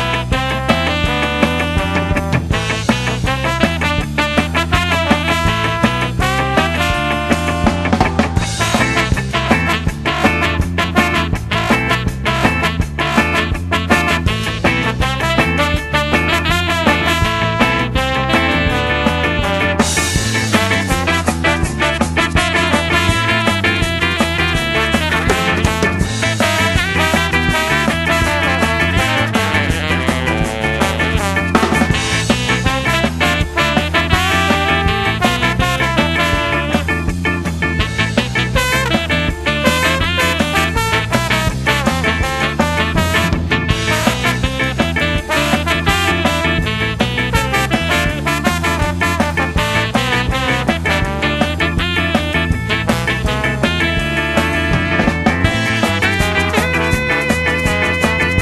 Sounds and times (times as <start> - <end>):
Swing music: 0.0 - 58.4.